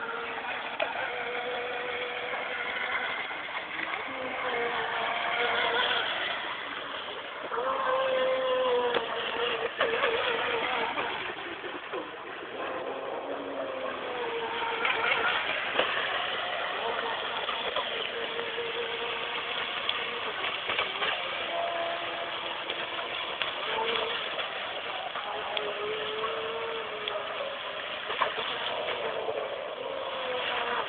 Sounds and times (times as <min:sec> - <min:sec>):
Motorboat, speedboat: 0:00.0 - 0:30.8.